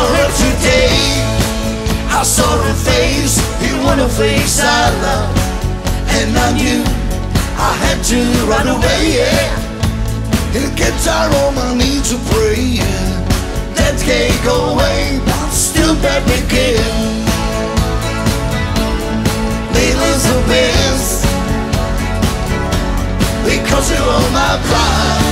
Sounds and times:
Music: 0.0 - 25.3.

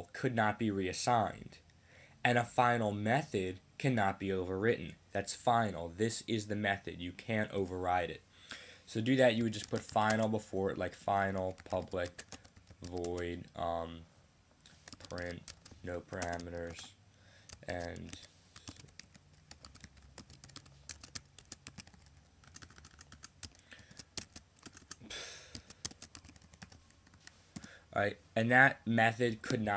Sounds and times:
Speech: 0.0 - 1.6, 2.3 - 8.2, 8.9 - 12.2, 12.8 - 14.1, 15.1 - 17.0, 17.6 - 18.3, 28.0 - 29.7.

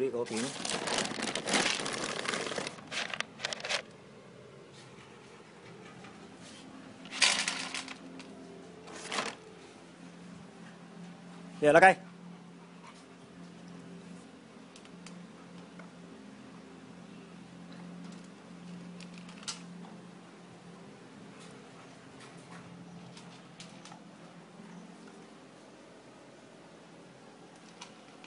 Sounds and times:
Speech: 0.0 - 0.6, 11.6 - 12.1.

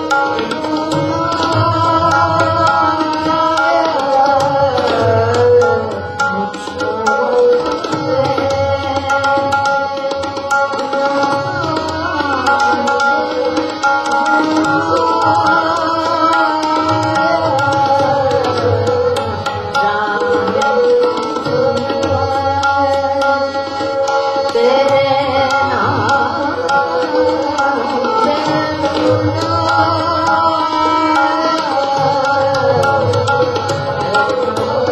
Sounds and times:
Music of Asia: 0.0 - 34.9
Singing: 0.0 - 34.9
Tabla: 0.0 - 34.9
Violin, fiddle: 0.0 - 34.9.

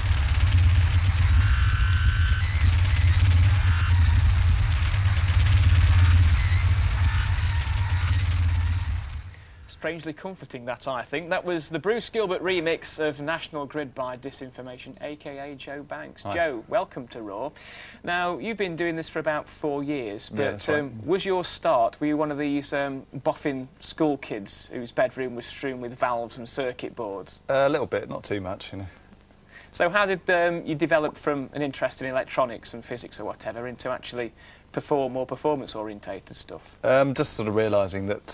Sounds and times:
Vibration: 0.0 - 9.7
Cacophony: 0.0 - 9.9
Speech: 9.8 - 29.0, 29.8 - 38.3.

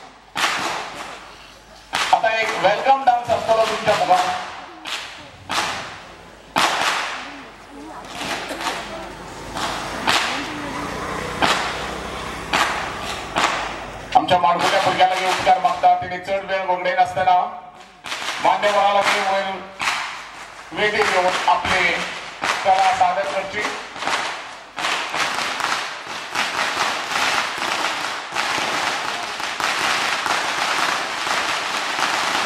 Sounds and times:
Speech: 10.2 - 11.0, 14.2 - 17.7, 20.7 - 23.8.

